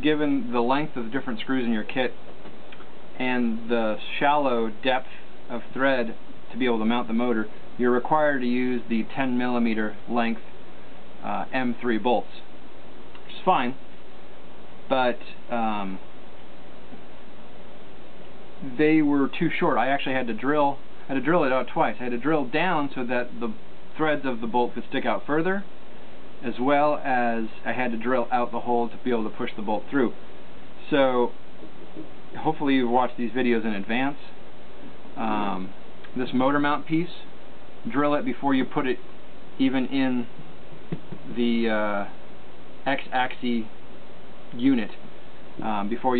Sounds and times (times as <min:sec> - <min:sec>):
Speech: 0:00.0 - 0:02.2, 0:03.2 - 0:10.5, 0:11.2 - 0:12.5, 0:13.2 - 0:13.8, 0:14.9 - 0:16.1, 0:18.6 - 0:25.7, 0:26.4 - 0:30.2, 0:30.8 - 0:31.4, 0:32.0 - 0:34.4, 0:35.2 - 0:40.4, 0:41.0 - 0:42.2, 0:42.8 - 0:43.8, 0:44.5 - 0:46.1.